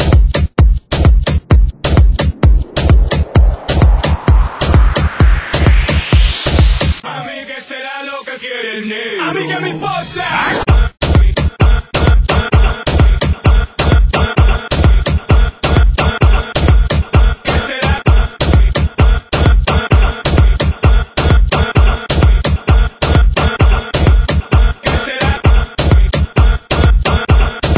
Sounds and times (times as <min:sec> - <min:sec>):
Dance music: 0:00.0 - 0:27.7.